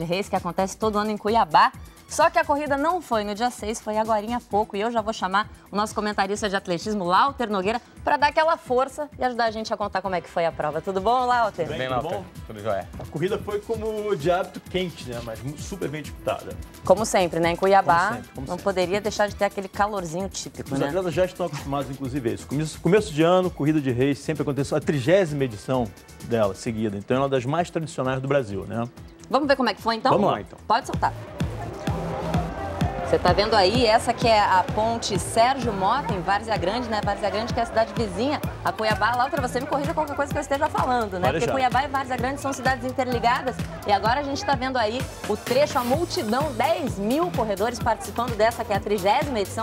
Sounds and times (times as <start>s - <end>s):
Music: 0.0s - 49.6s.